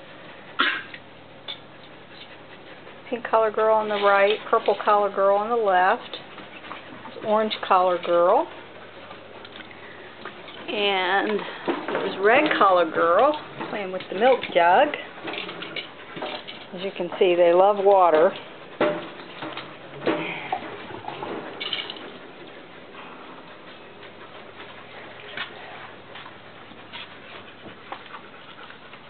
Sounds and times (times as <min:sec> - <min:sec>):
Speech: 0:03.1 - 0:06.2, 0:07.2 - 0:08.5, 0:10.7 - 0:15.1, 0:16.7 - 0:18.4.